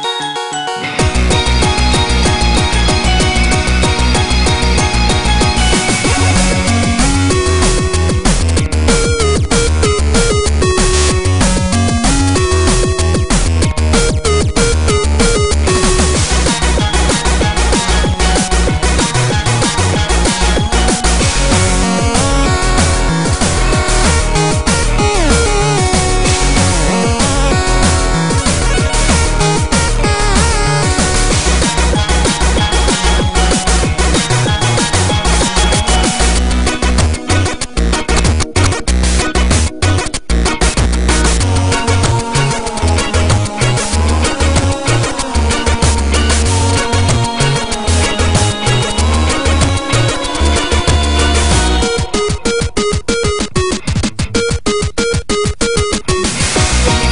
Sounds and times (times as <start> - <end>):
Music: 0.0 - 57.1.